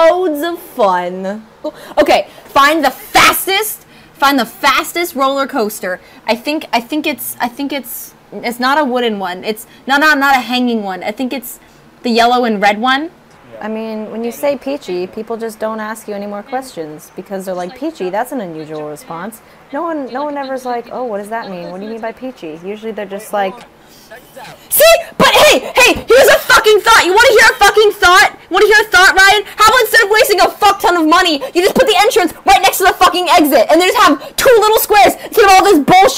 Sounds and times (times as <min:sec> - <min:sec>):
Speech: 0:02.0 - 0:36.1.